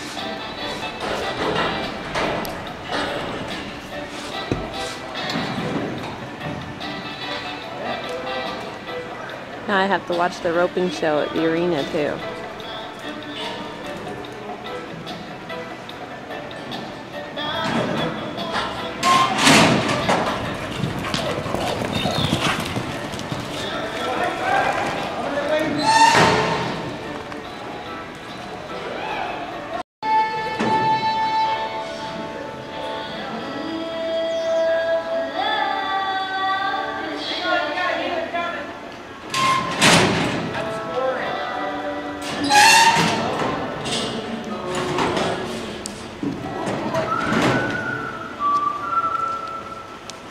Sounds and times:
Music: 0.0 - 50.3
Speech: 9.7 - 12.3.

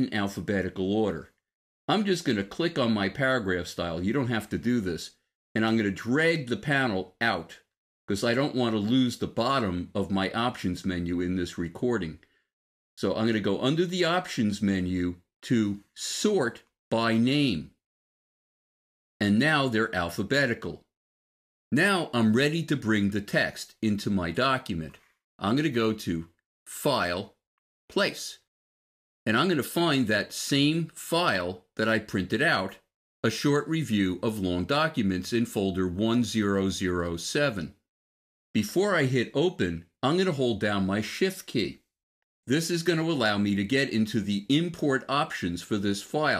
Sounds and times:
Narration, monologue: 0.0 - 17.9, 19.2 - 20.9, 21.7 - 28.5, 29.3 - 37.9, 38.6 - 46.3.

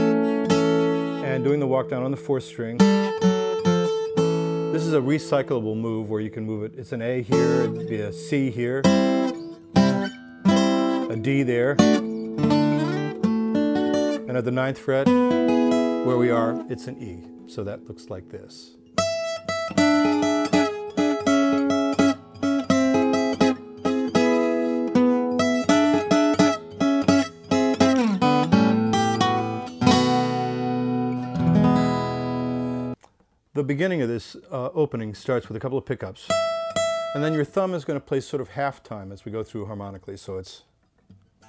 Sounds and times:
Acoustic guitar: 0.0 - 33.3, 35.3 - 39.0, 39.8 - 41.4
Speech: 1.2 - 2.9, 4.7 - 8.9, 11.1 - 12.0, 14.2 - 15.2, 16.0 - 18.8, 33.6 - 36.4, 37.2 - 40.7.

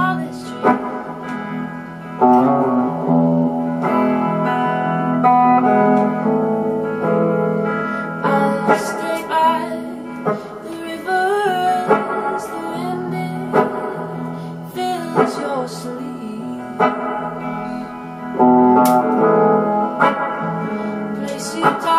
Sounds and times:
Guitar: 0.0 - 21.9.

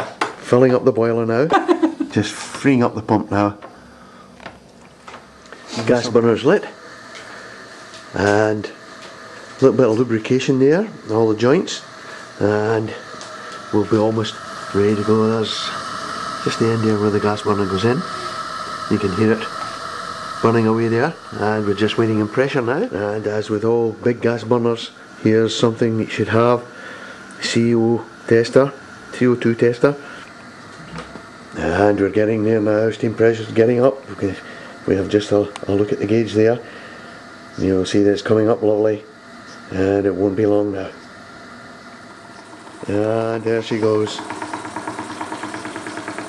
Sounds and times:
Speech: 0.4 - 1.5, 2.1 - 3.6, 5.8 - 6.8, 8.2 - 8.8, 9.6 - 13.0, 13.7 - 15.8, 16.5 - 18.1, 18.9 - 19.5, 20.4 - 26.7, 27.4 - 30.0, 31.6 - 36.7, 37.6 - 39.1, 39.7 - 41.0, 42.9 - 44.3.

